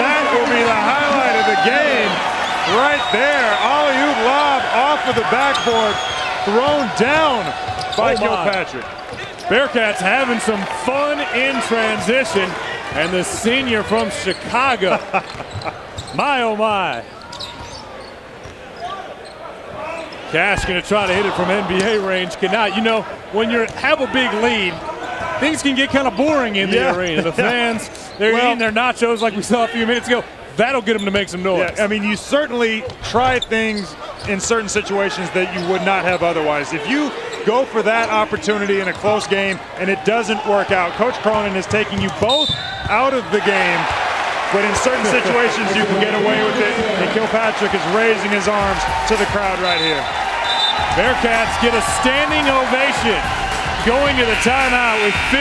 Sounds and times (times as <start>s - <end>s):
Speech: 0.0s - 8.8s, 9.4s - 15.0s, 16.1s - 17.1s, 19.8s - 43.9s, 44.5s - 50.0s, 51.0s - 55.4s.